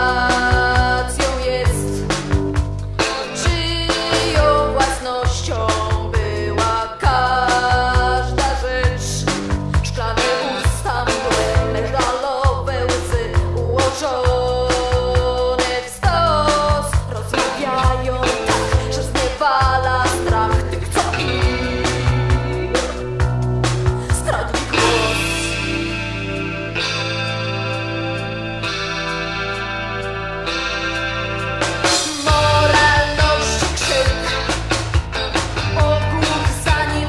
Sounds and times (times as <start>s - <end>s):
Soul music: 0.0s - 37.0s.